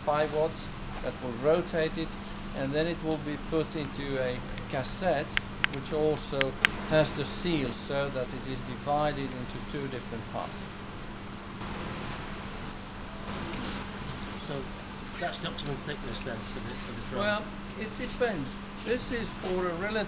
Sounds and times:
Speech: 0.0 - 10.7, 14.4 - 20.0.

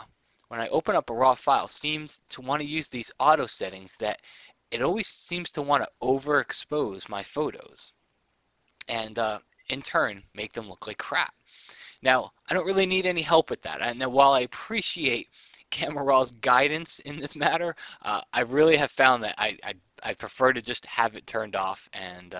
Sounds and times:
Speech: 0.6 - 7.9, 8.8 - 22.3.

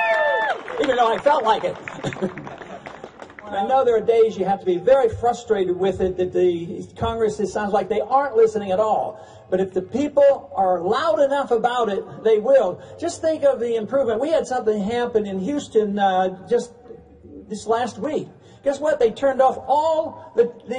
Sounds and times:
Speech: 0.8 - 1.8, 3.4 - 20.7.

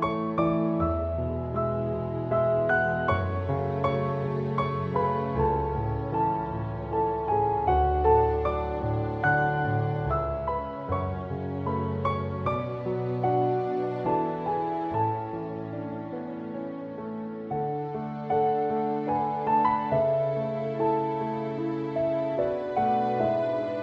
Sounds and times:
Music: 0.0 - 23.8.

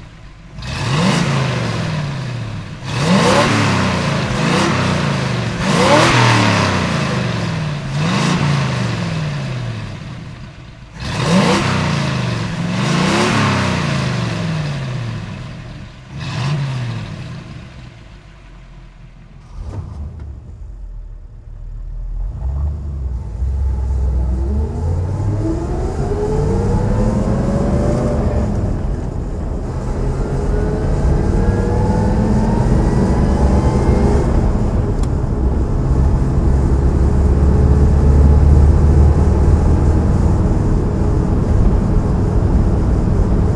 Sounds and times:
Car: 0.0 - 43.5
Accelerating, revving, vroom: 0.6 - 10.0, 11.0 - 17.8, 22.2 - 29.0, 29.7 - 35.2, 35.8 - 43.4.

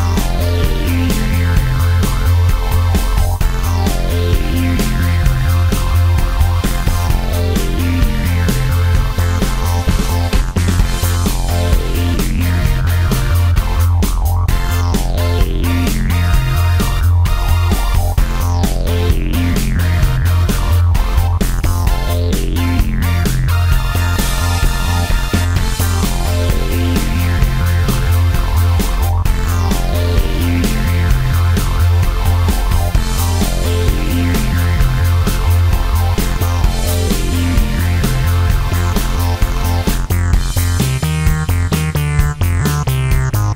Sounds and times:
Music: 0.0 - 43.5.

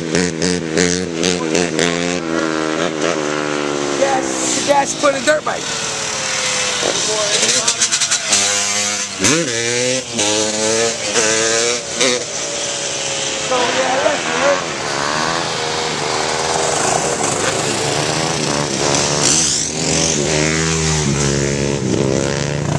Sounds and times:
Motorcycle: 0.0 - 22.7
Outside, rural or natural: 0.0 - 22.7
Speech: 13.5 - 14.6.

